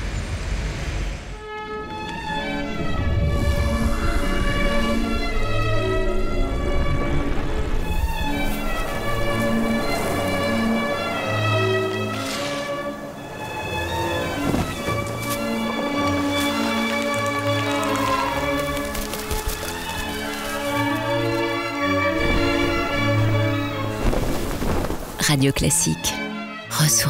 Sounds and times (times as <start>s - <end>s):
Music: 1.0s - 27.0s
Speech: 25.2s - 27.0s.